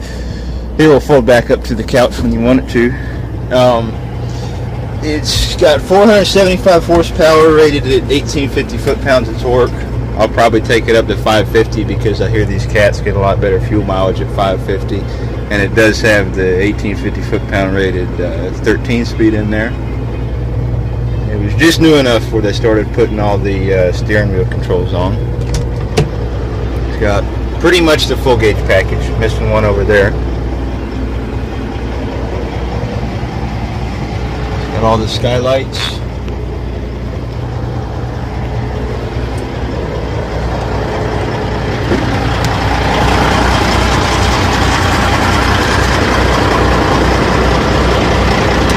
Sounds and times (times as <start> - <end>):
Truck: 0.0 - 48.7
Speech: 0.8 - 4.0, 5.0 - 19.8, 21.2 - 25.2, 26.9 - 30.2, 34.7 - 36.1.